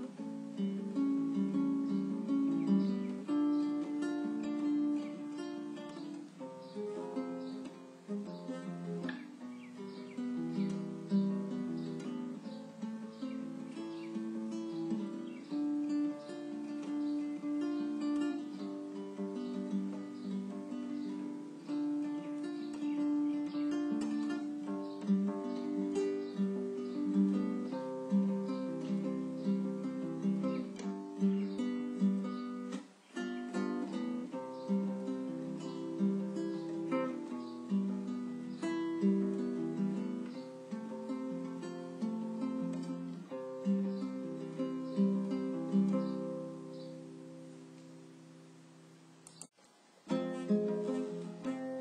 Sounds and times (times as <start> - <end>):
Acoustic guitar: 0.0 - 51.8.